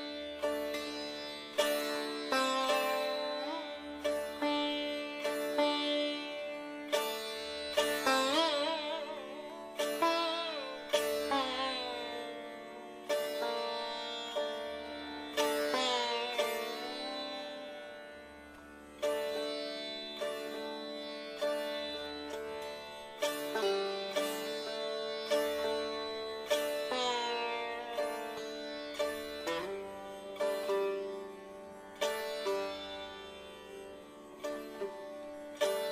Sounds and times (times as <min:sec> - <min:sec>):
Sitar: 0:00.0 - 0:35.9.